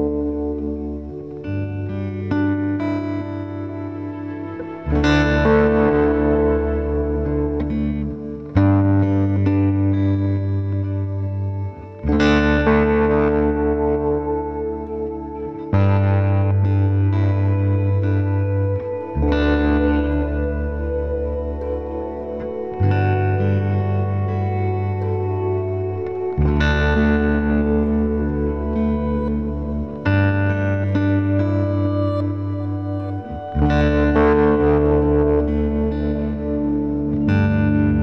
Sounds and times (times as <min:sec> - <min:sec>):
Music: 0:00.0 - 0:38.0.